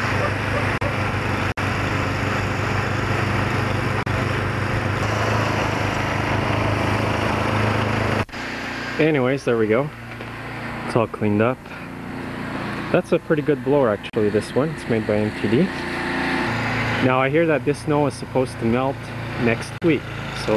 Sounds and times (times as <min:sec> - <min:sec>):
Outside, rural or natural: 0:00.0 - 0:20.5
Vehicle: 0:00.0 - 0:20.5
Speech: 0:09.0 - 0:09.9, 0:10.9 - 0:11.6, 0:12.9 - 0:15.8, 0:17.0 - 0:20.5.